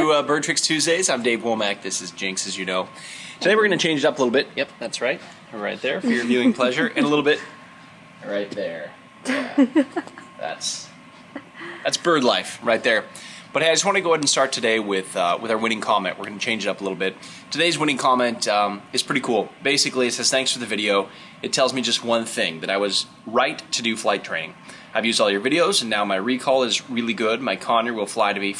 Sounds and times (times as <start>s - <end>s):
Male speech, man speaking: 0.0s - 7.5s, 8.2s - 9.0s, 10.4s - 10.9s, 11.8s - 28.5s.